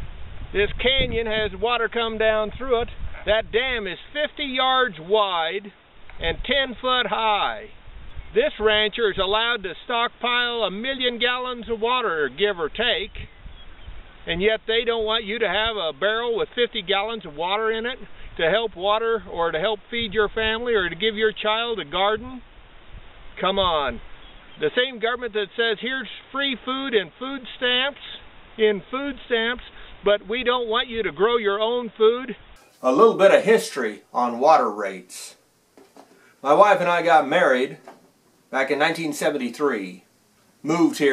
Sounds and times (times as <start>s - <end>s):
Speech: 0.6s - 7.7s, 8.4s - 13.2s, 14.3s - 22.4s, 23.4s - 24.0s, 24.6s - 35.4s, 36.4s - 37.8s, 38.5s - 40.0s, 40.6s - 41.1s.